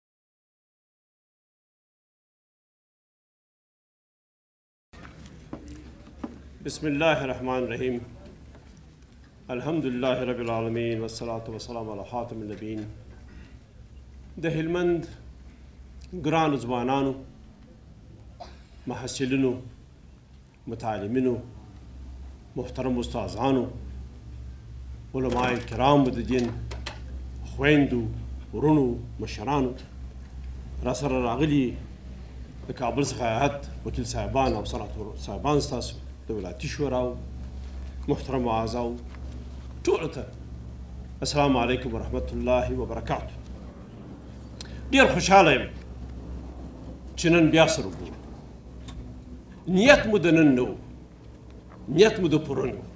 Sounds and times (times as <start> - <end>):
Narration, monologue: 5.0 - 52.9
Male speech, man speaking: 6.6 - 8.4, 9.5 - 13.2, 14.4 - 15.2, 16.1 - 17.3, 18.9 - 19.7, 20.7 - 21.5, 22.6 - 23.8, 25.1 - 26.6, 27.4 - 29.9, 30.8 - 31.9, 32.6 - 37.2, 38.1 - 39.0, 39.8 - 40.4, 41.2 - 43.4, 44.9 - 45.8, 47.2 - 48.1, 49.7 - 50.8, 51.9 - 52.9.